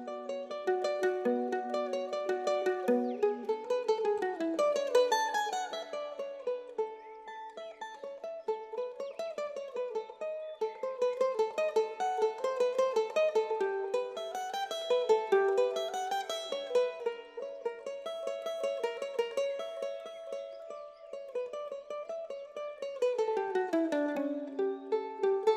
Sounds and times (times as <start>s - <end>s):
Mandolin: 0.0s - 25.5s.